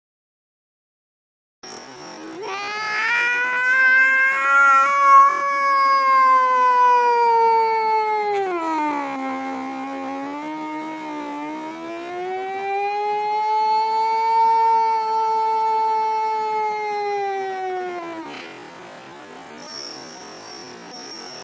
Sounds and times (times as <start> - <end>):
Siren: 2.0 - 18.5.